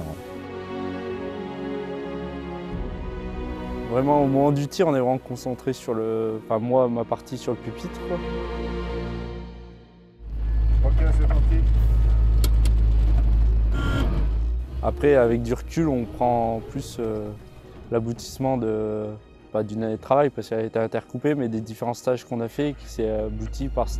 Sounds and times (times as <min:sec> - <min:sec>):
Male speech, man speaking: 0:00.0 - 0:00.2, 0:03.9 - 0:08.3, 0:10.8 - 0:11.7, 0:14.8 - 0:23.9
Music: 0:00.0 - 0:12.7, 0:14.6 - 0:23.9.